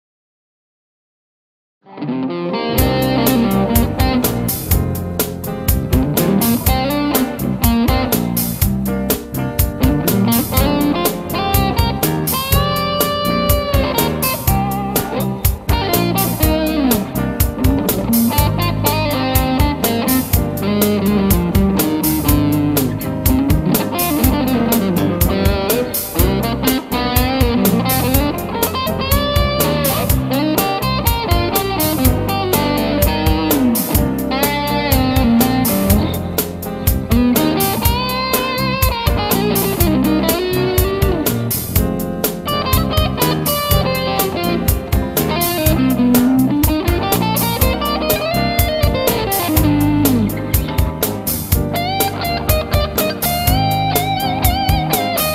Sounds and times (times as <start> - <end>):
Electric guitar: 1.8 - 55.3.